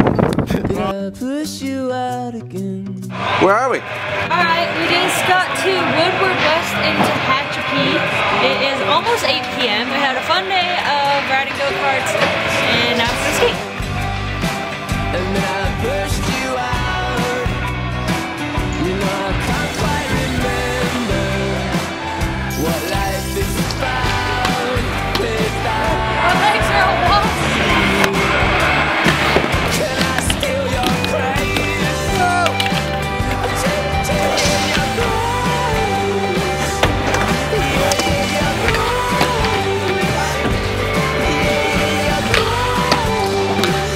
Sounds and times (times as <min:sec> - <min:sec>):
Skateboard: 0:25.9 - 0:35.2.